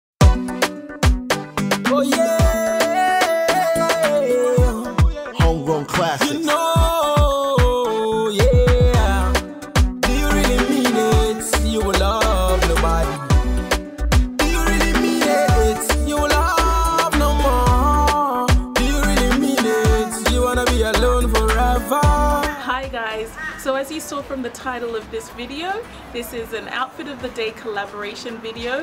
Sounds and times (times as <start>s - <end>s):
Afrobeat: 0.2s - 28.8s.